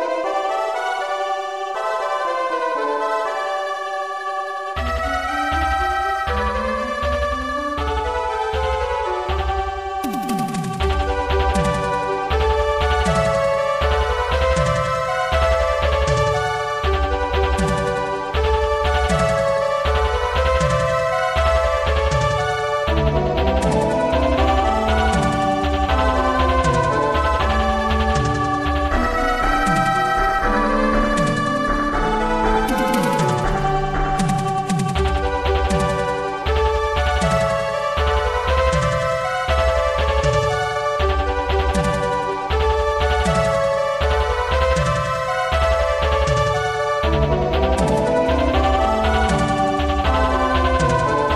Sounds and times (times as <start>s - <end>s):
Video game music: 0.0s - 51.3s
Theme music: 4.8s - 51.3s.